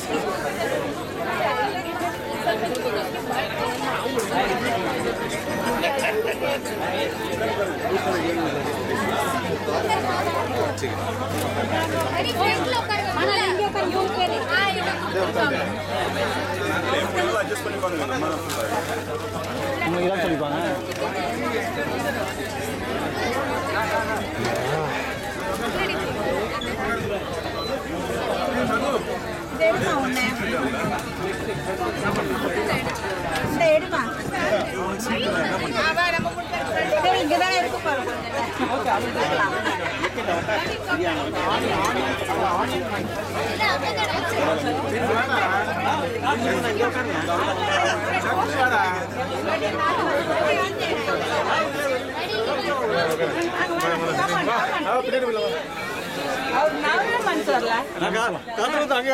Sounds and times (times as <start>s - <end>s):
Speech: 0.0s - 59.1s.